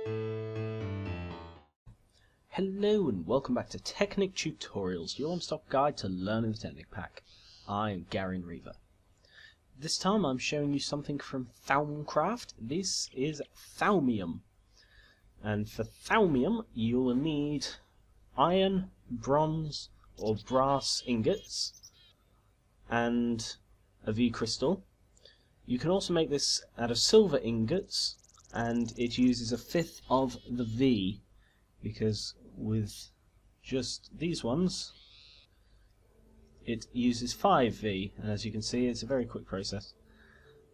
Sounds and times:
Speech: 2.5 - 8.8, 9.8 - 14.4, 15.4 - 17.8, 18.4 - 21.8, 22.9 - 24.8, 25.7 - 31.2, 31.8 - 35.0, 36.6 - 40.0.

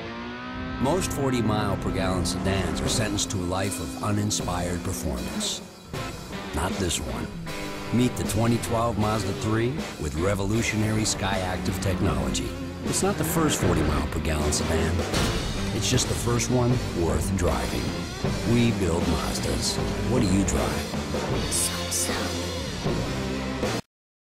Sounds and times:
Music: 0.7 - 23.8
Speech: 0.8 - 5.6, 6.6 - 15.0, 15.7 - 20.9, 21.5 - 22.4.

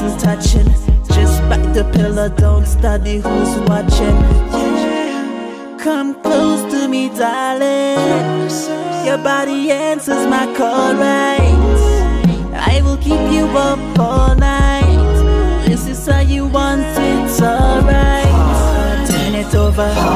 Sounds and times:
Hip hop music: 0.0 - 20.1
Rhythm and blues: 0.0 - 20.1.

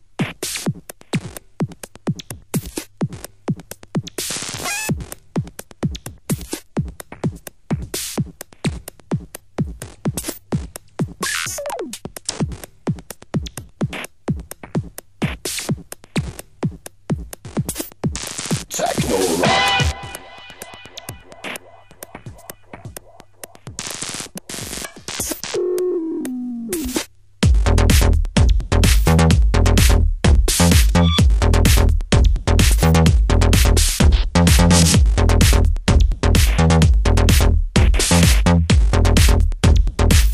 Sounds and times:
Techno: 17.1 - 40.3.

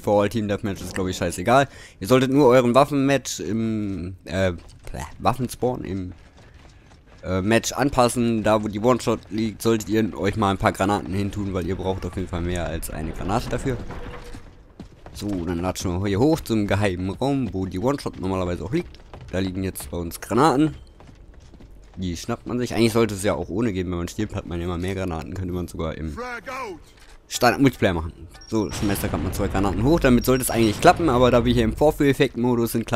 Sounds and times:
Speech: 0.0 - 6.1, 7.2 - 13.9, 15.2 - 20.8, 22.0 - 32.9.

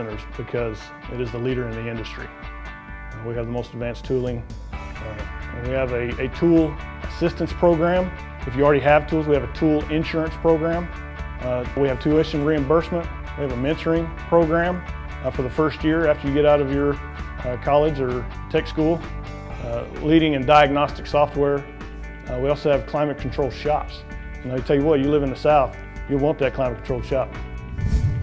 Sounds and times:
Speech: 0.0 - 2.4, 3.2 - 4.4, 5.0 - 19.0, 19.6 - 21.7, 22.3 - 27.4
Music: 0.0 - 28.2.

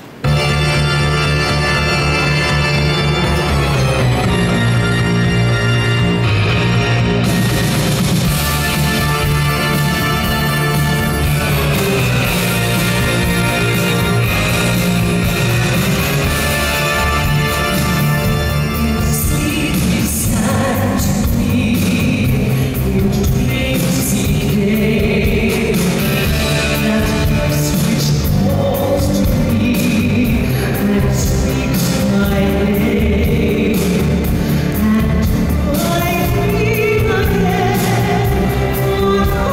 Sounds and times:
Music: 0.0 - 39.5.

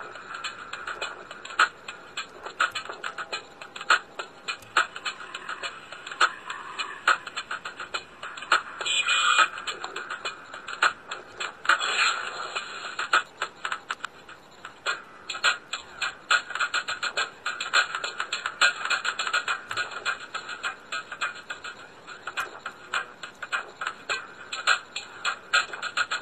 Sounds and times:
Music: 0.0 - 26.2.

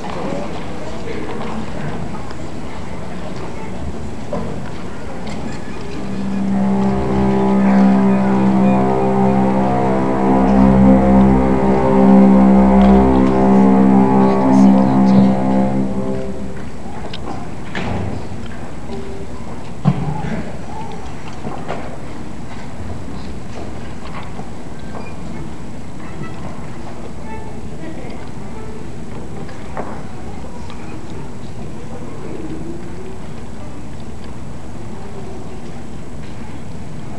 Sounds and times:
Speech: 0.0 - 6.4, 26.0 - 37.1.

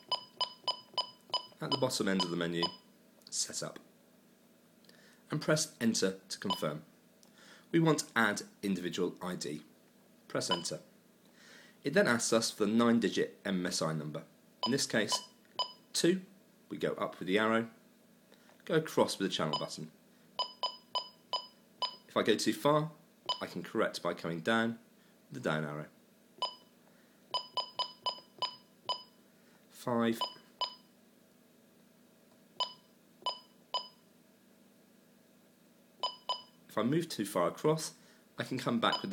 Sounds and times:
Speech: 1.6 - 3.9, 5.3 - 6.9, 7.7 - 9.7, 10.3 - 10.9, 11.8 - 15.2, 16.0 - 17.8, 18.6 - 20.0, 22.1 - 26.0, 29.7 - 30.3, 36.7 - 39.1.

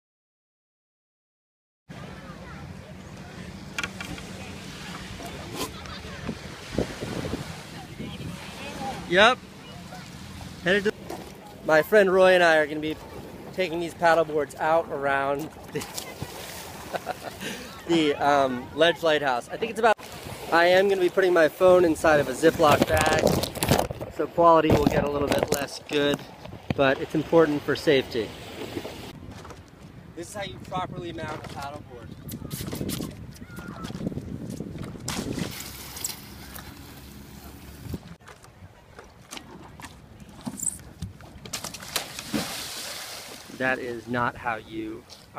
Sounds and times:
Outside, rural or natural: 1.9 - 45.3
Speech: 24.2 - 26.2, 30.2 - 32.1.

